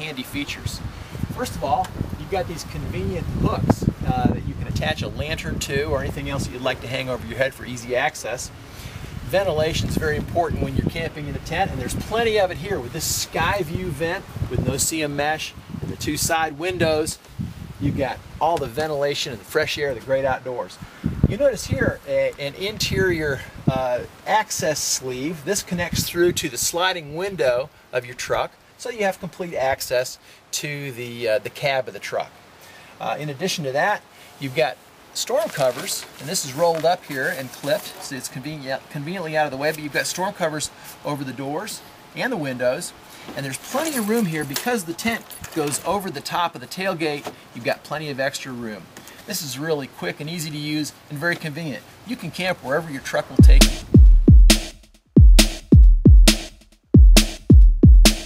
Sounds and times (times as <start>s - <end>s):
Speech: 0.0s - 8.5s, 9.3s - 17.2s, 17.8s - 32.4s, 33.0s - 53.8s.